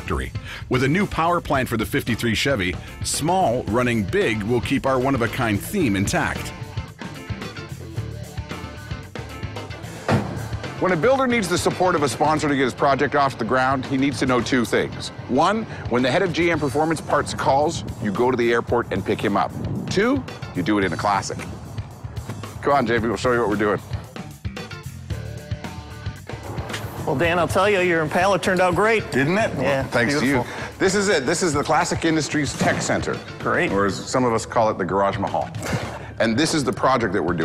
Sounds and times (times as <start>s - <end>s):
Music: 0.0s - 37.4s
Speech: 22.6s - 23.8s, 27.1s - 35.6s, 36.2s - 37.4s.